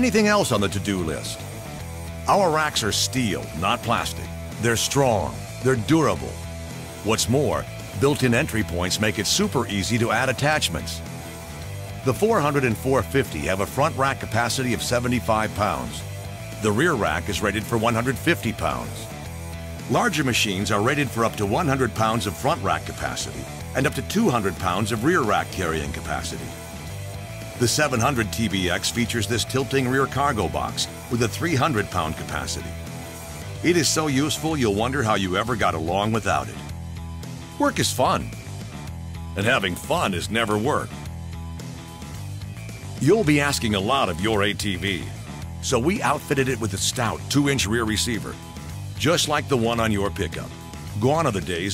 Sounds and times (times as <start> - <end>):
Speech: 0.0 - 1.4, 2.2 - 6.4, 7.0 - 11.1, 12.0 - 16.0, 16.6 - 19.1, 19.9 - 26.6, 27.6 - 32.8, 33.6 - 36.7, 37.6 - 38.4, 39.4 - 41.0, 43.0 - 48.4, 49.0 - 51.7
Music: 0.0 - 51.7.